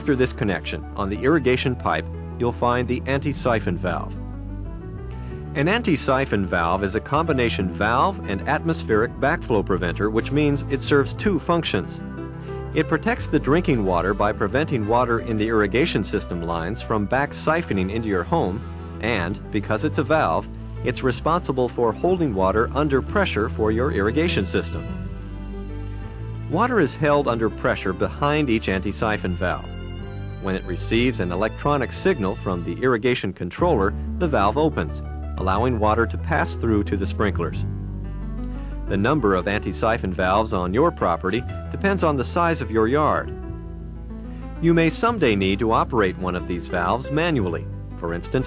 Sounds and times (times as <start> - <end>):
Speech: 0.0 - 4.2, 5.6 - 12.0, 12.8 - 25.0, 26.5 - 29.7, 30.4 - 37.6, 38.9 - 43.3, 44.6 - 48.4
Music: 0.0 - 48.4.